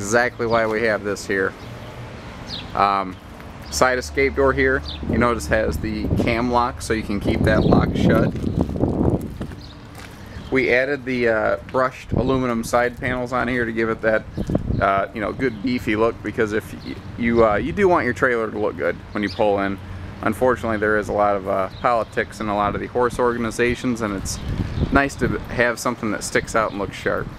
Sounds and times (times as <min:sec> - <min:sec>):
Speech: 0:00.0 - 0:01.6, 0:02.8 - 0:08.4, 0:10.5 - 0:27.3.